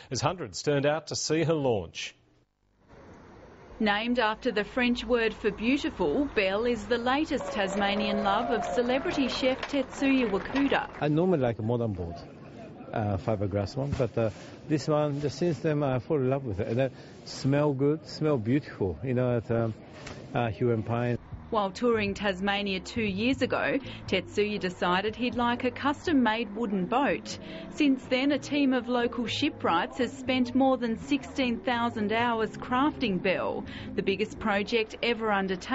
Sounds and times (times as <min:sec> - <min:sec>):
Speech: 0:13.0 - 0:19.8.